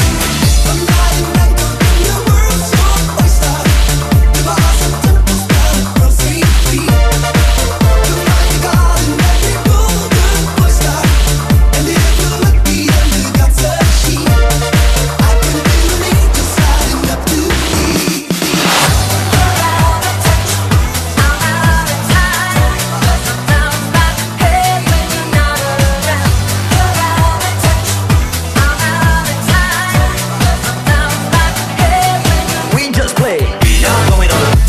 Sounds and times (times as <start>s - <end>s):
Dance music: 0.0s - 34.6s
Disco: 0.0s - 34.6s.